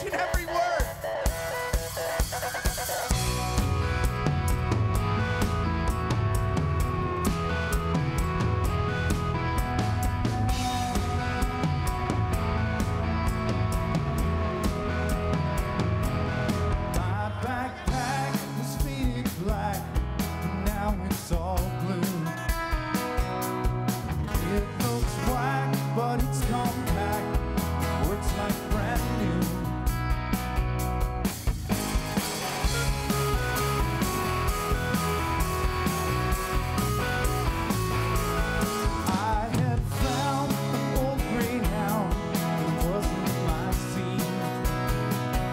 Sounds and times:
Music: 0.0 - 45.5.

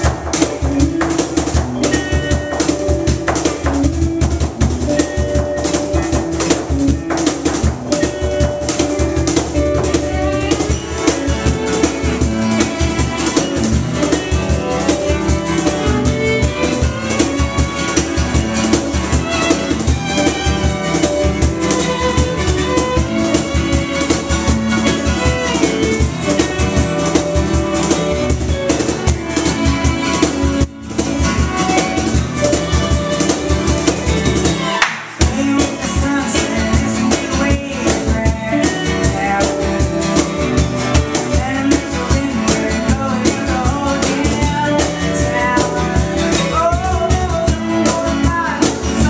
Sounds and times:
Music: 0.0 - 49.0.

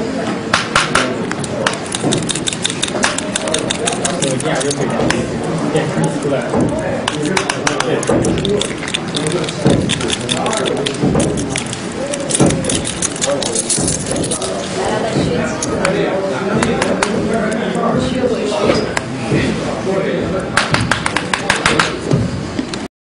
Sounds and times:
Speech: 2.9 - 22.3.

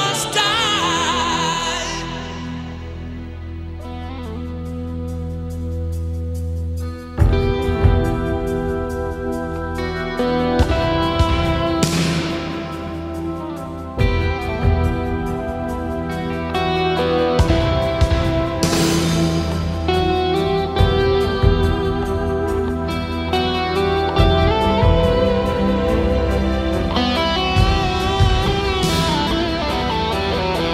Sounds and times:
Steel guitar, slide guitar: 0.0 - 30.7.

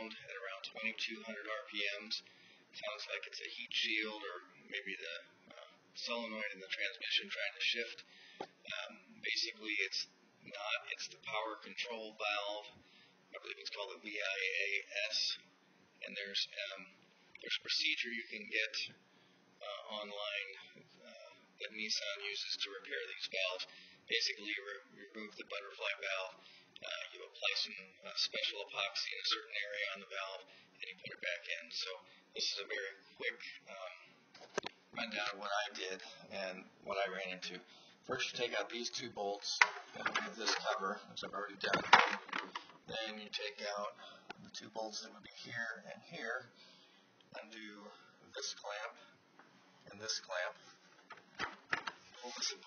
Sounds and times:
Speech: 0.0 - 19.0, 19.6 - 34.2, 34.9 - 46.6, 47.3 - 49.2, 49.8 - 50.7, 52.2 - 52.6.

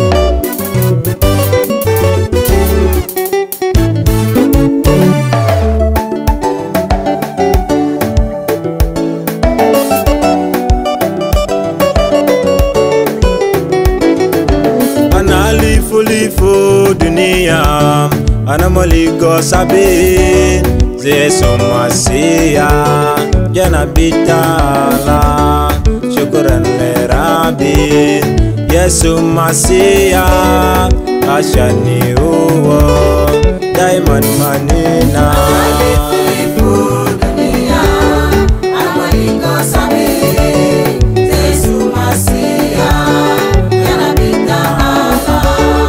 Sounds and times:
Gospel music: 0.0 - 45.8.

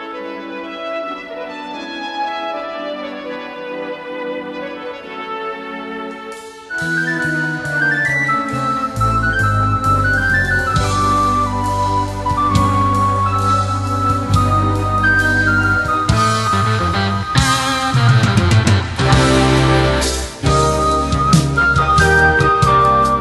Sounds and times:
Music: 0.0 - 23.2.

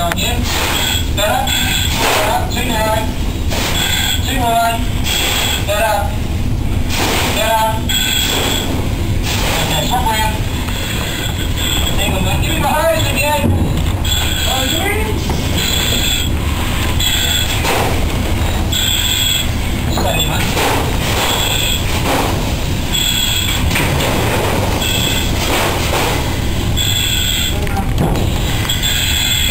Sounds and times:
Speech: 0.0 - 0.5, 1.2 - 3.2, 4.2 - 4.8, 7.3 - 7.8, 9.5 - 10.4, 12.0 - 13.6, 14.5 - 15.3.

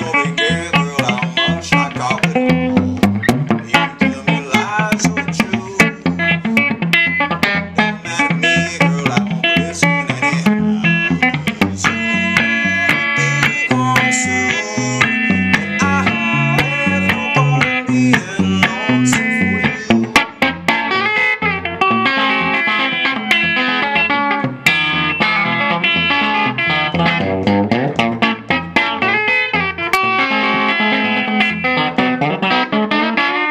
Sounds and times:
Electric guitar: 0.0 - 33.5.

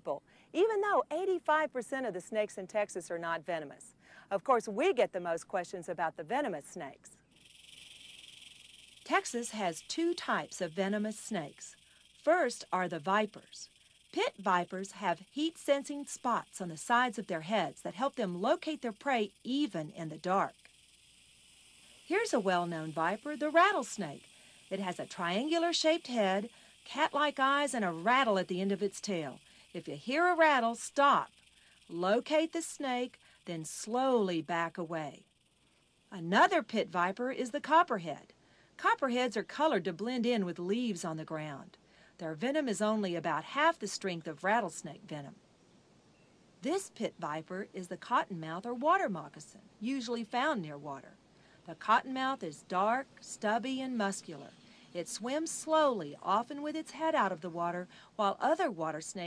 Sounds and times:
Speech: 0.0 - 7.1, 9.1 - 11.7, 12.3 - 20.6, 22.1 - 31.3, 31.9 - 35.2, 36.2 - 45.4, 46.6 - 51.1, 51.7 - 59.2
Snake: 7.2 - 38.4, 49.0 - 58.2.

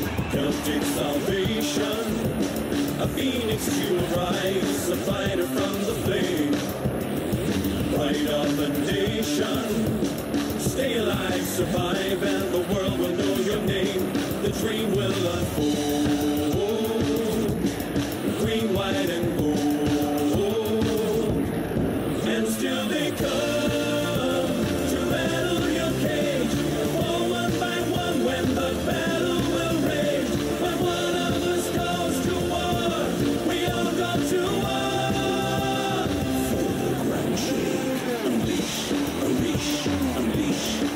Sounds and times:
Music: 0.0 - 40.9.

